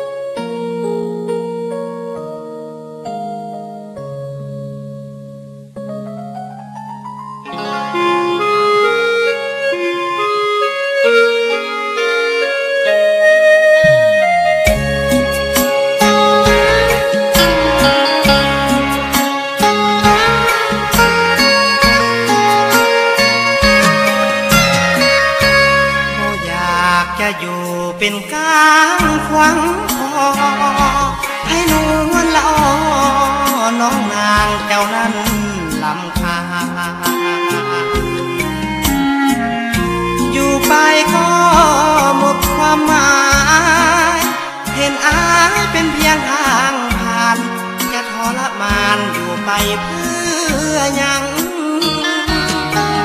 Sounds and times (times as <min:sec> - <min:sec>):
Country: 0:13.8 - 0:53.0.